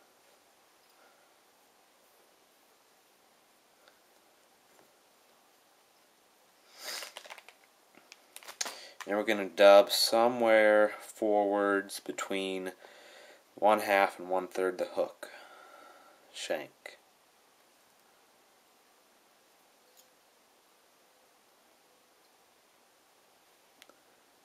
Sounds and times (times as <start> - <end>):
Speech: 9.0 - 12.8, 13.6 - 15.3, 16.4 - 17.0.